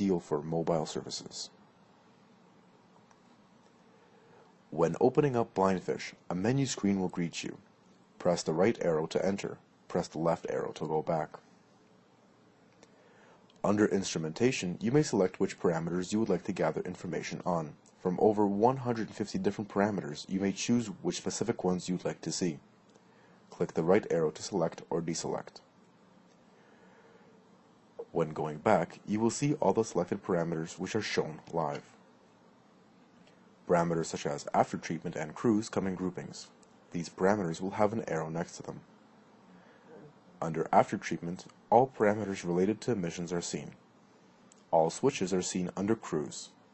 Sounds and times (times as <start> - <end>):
Speech: 0.0 - 1.6, 4.7 - 11.4, 13.6 - 22.6, 23.5 - 25.7, 28.0 - 32.0, 33.6 - 38.9, 40.0 - 43.8, 44.7 - 46.6.